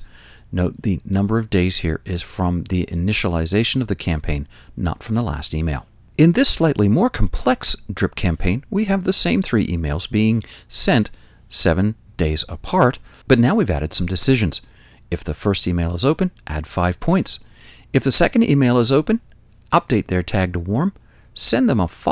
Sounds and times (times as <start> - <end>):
Speech: 0.0 - 22.1.